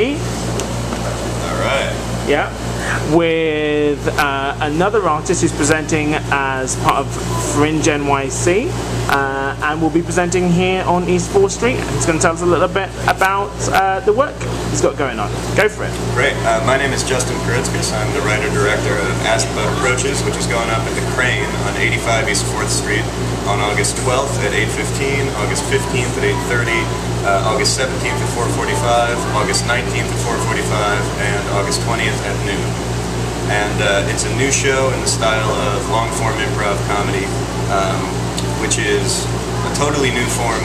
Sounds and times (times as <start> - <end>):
Speech: 1.4 - 32.8, 33.5 - 40.6.